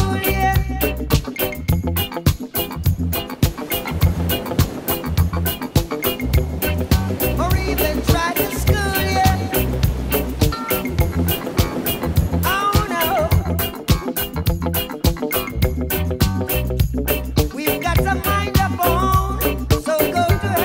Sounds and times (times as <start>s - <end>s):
Funk: 0.0s - 20.6s.